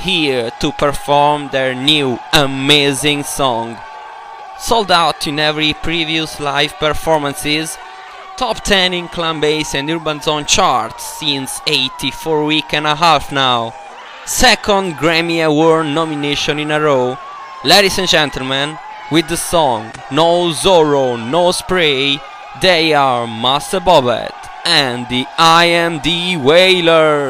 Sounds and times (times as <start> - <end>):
Speech: 0.0 - 3.8, 4.6 - 7.8, 8.4 - 27.2.